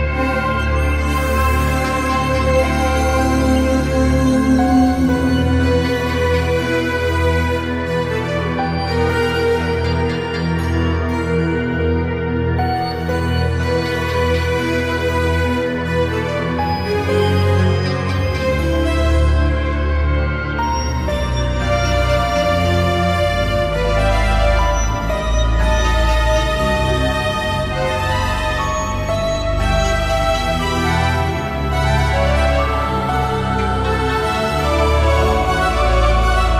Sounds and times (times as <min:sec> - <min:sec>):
Ambient music: 0:00.0 - 0:36.5
Theme music: 0:00.0 - 0:36.5.